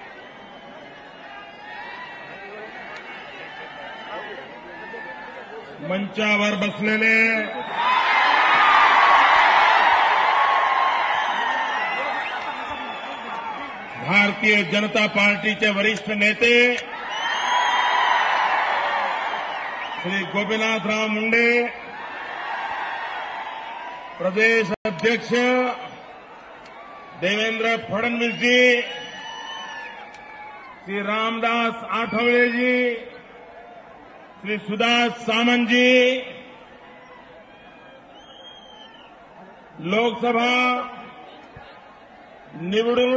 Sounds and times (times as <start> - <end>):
Male speech, man speaking: 5.8 - 7.6, 14.0 - 16.8, 20.0 - 21.8, 24.2 - 25.9, 27.2 - 28.9, 30.9 - 33.1, 34.4 - 36.4, 39.8 - 41.0, 42.6 - 43.1
Narration, monologue: 13.9 - 16.9, 24.2 - 26.0, 34.4 - 36.6.